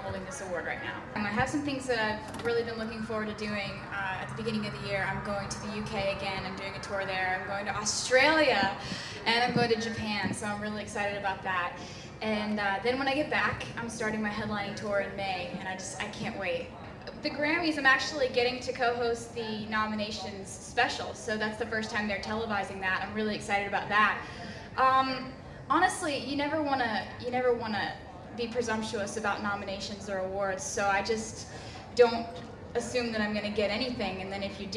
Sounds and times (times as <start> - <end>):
Speech: 0.0 - 34.7.